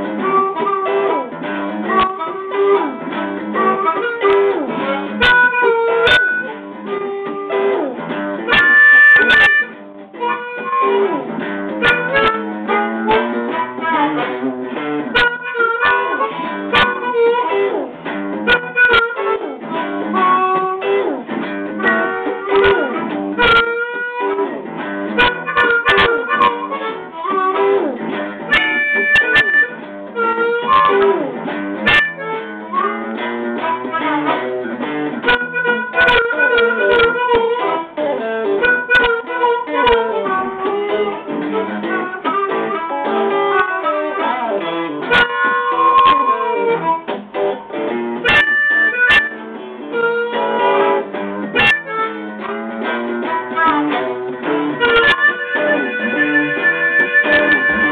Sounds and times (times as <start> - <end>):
Harmonica: 0.0 - 57.9.